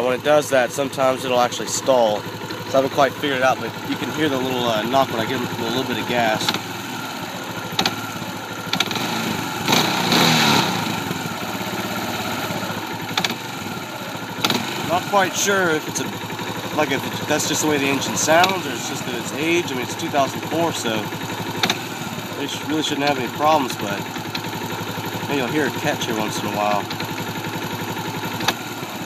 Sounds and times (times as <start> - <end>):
Speech: 0.0 - 6.5, 14.9 - 16.1, 16.8 - 21.1, 22.4 - 24.1, 25.2 - 26.9
Idling: 0.0 - 29.0
Medium engine (mid frequency): 0.0 - 29.0.